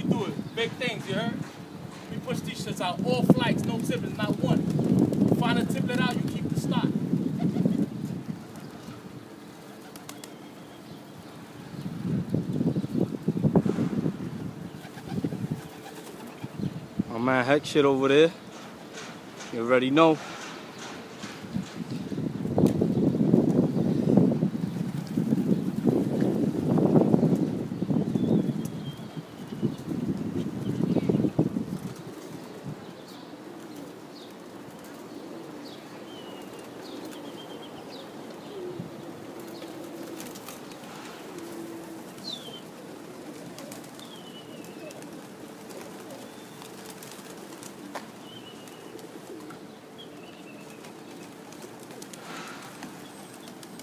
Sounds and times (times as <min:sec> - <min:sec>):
Speech: 0:00.0 - 0:01.4, 0:02.1 - 0:04.6, 0:05.3 - 0:07.0, 0:17.1 - 0:18.4, 0:19.5 - 0:20.2
Outside, urban or manmade: 0:00.0 - 0:53.8.